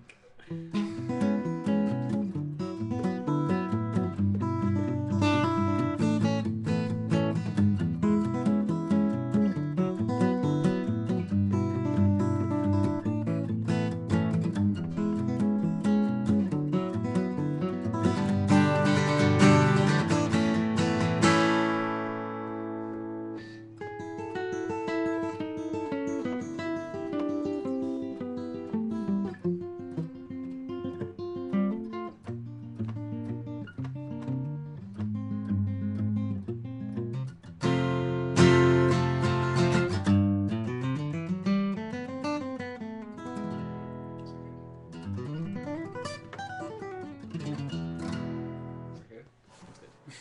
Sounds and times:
Guitar: 0:00.0 - 0:50.2.

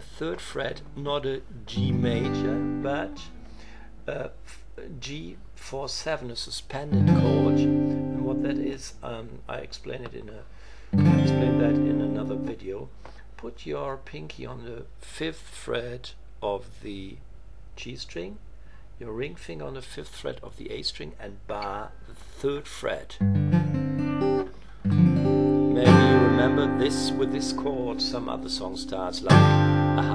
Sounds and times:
Speech: 0:00.0 - 0:03.3, 0:04.1 - 0:10.5, 0:11.1 - 0:17.2, 0:17.8 - 0:18.4, 0:19.0 - 0:23.2, 0:25.8 - 0:30.1.

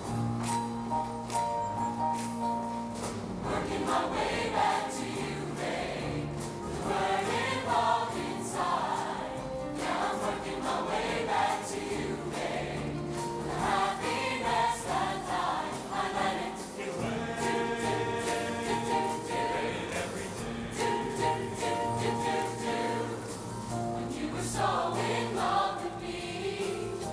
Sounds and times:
Music: 0:00.0 - 0:27.1
Male singing: 0:17.0 - 0:21.0.

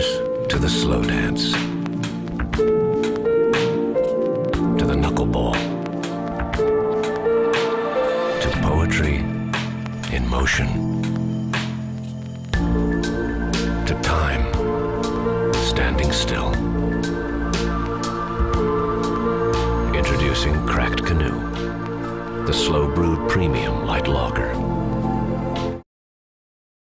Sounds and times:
Speech: 0:00.0 - 0:01.6, 0:04.8 - 0:05.7, 0:08.4 - 0:09.4, 0:10.1 - 0:10.9, 0:13.8 - 0:14.6, 0:15.6 - 0:16.6, 0:19.9 - 0:21.5, 0:22.5 - 0:24.6
Music: 0:00.0 - 0:25.8.

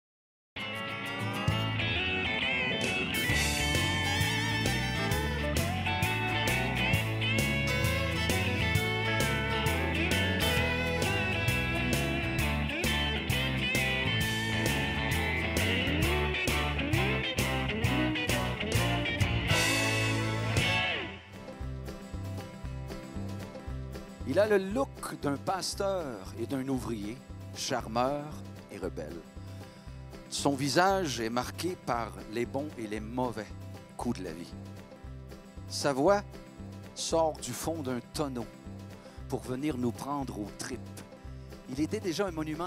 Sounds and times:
Country: 0:00.6 - 0:42.6
Speech: 0:24.3 - 0:29.3, 0:30.3 - 0:34.6, 0:35.7 - 0:36.3, 0:37.0 - 0:38.5, 0:39.3 - 0:41.0, 0:41.7 - 0:42.6.

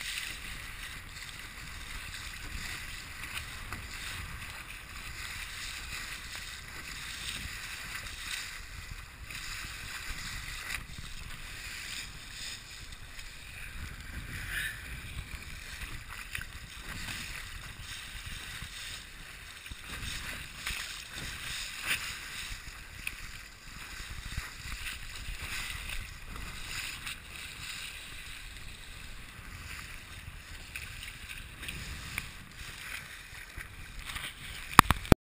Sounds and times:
Sailboat, sailing ship: 0:00.0 - 0:35.2.

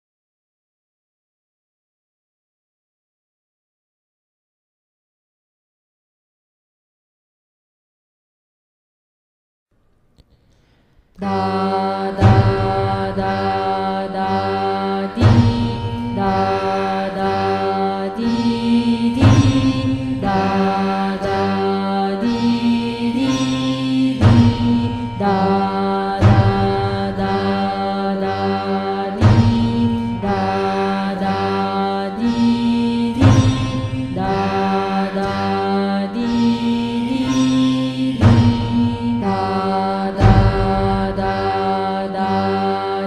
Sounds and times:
Mantra: 0:11.2 - 0:43.0.

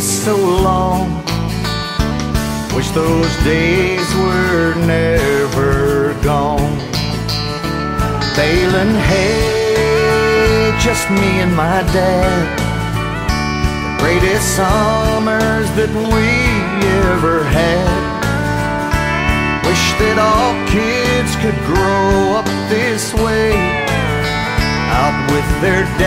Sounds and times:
Country: 0:00.0 - 0:26.0.

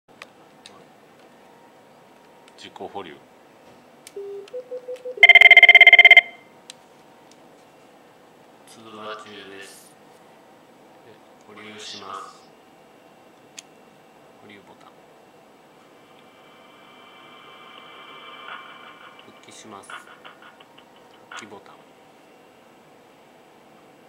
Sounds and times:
Speech: 0:02.6 - 0:03.2, 0:08.7 - 0:09.9, 0:11.1 - 0:12.5, 0:14.4 - 0:15.0, 0:21.4 - 0:21.9
Telephone: 0:04.2 - 0:06.4.

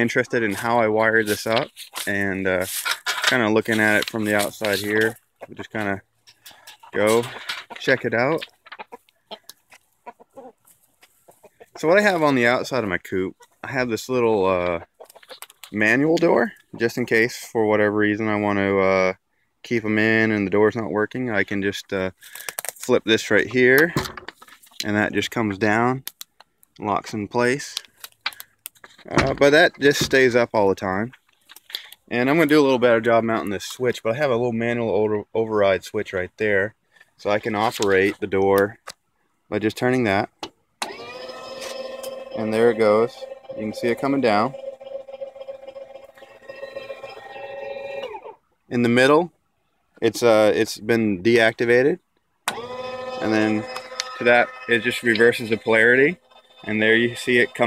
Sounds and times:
Speech: 0:00.0 - 0:06.0, 0:06.9 - 0:08.5, 0:11.8 - 0:14.9, 0:15.7 - 0:22.2, 0:22.8 - 0:24.0, 0:24.8 - 0:26.0, 0:26.8 - 0:27.9, 0:29.0 - 0:31.2, 0:32.1 - 0:38.8, 0:39.5 - 0:40.3, 0:42.4 - 0:44.6, 0:48.7 - 0:49.3, 0:50.0 - 0:52.0, 0:53.2 - 0:57.6.

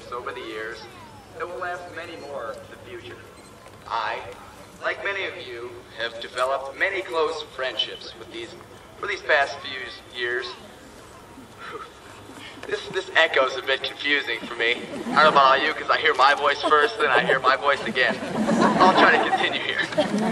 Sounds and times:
Male speech, man speaking: 0:00.0 - 0:03.3, 0:03.9 - 0:10.6, 0:12.7 - 0:18.2, 0:18.8 - 0:20.0.

